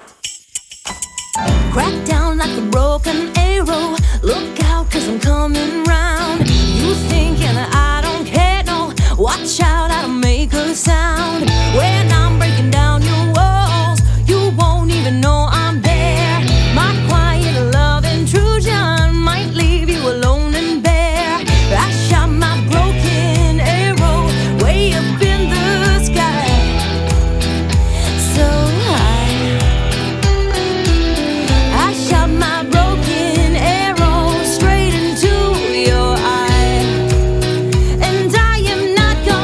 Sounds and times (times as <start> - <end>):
Music: 0.0 - 39.4.